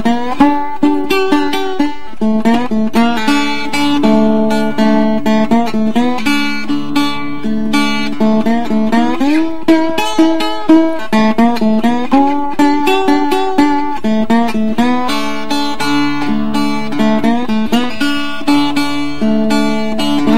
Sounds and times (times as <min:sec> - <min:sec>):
Acoustic guitar: 0:00.0 - 0:20.3
Strum: 0:00.0 - 0:20.3.